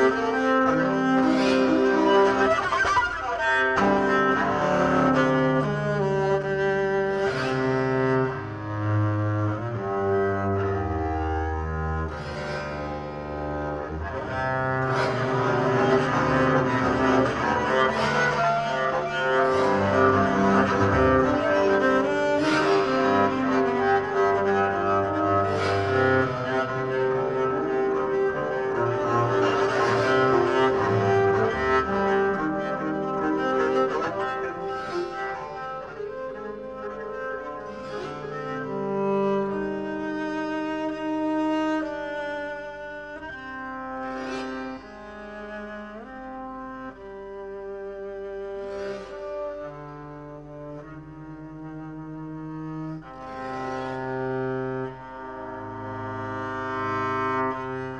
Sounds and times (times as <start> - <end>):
Cello: 0.0 - 57.9
Double bass: 0.0 - 57.9.